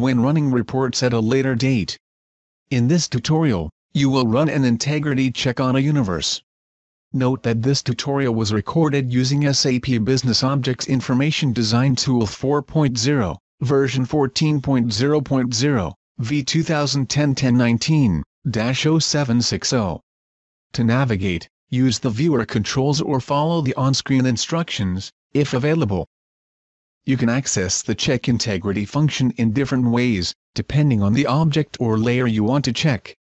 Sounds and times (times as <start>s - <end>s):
Speech: 0.0s - 2.0s, 2.7s - 6.4s, 7.2s - 20.0s, 20.7s - 26.1s, 27.0s - 33.2s.